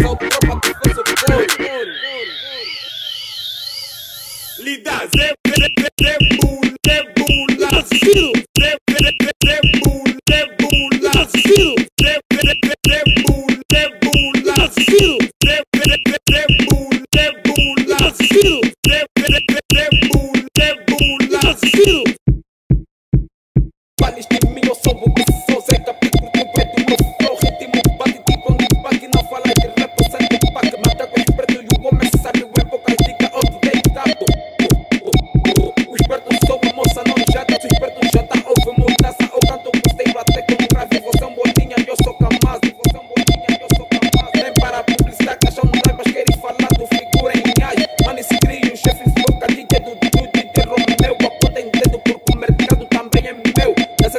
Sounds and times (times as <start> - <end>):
Music of Africa: 0.0 - 1.9, 5.1 - 22.1, 24.0 - 54.1.